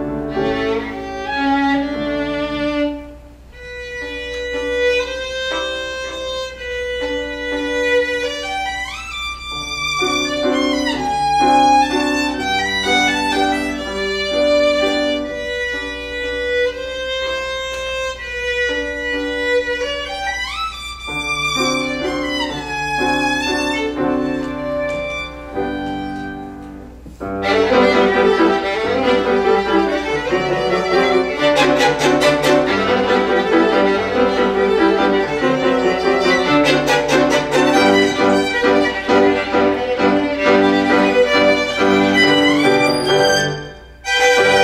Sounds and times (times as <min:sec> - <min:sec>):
Piano: 0:00.0 - 0:44.6
Violin, fiddle: 0:00.0 - 0:44.6.